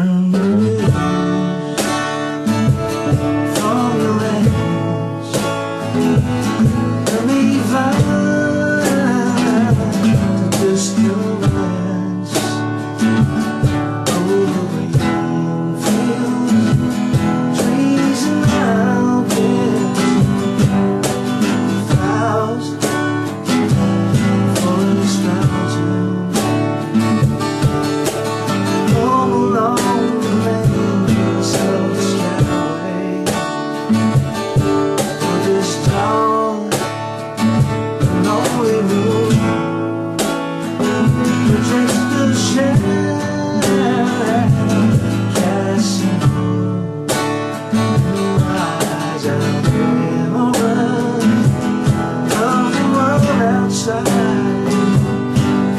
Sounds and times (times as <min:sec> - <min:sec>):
Music: 0:00.0 - 0:55.7.